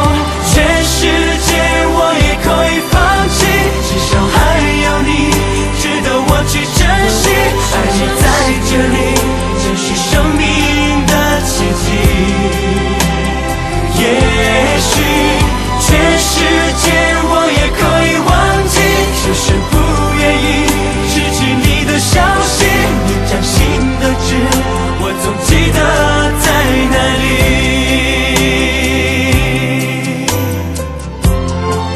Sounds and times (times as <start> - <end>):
Pop music: 0.0 - 31.9.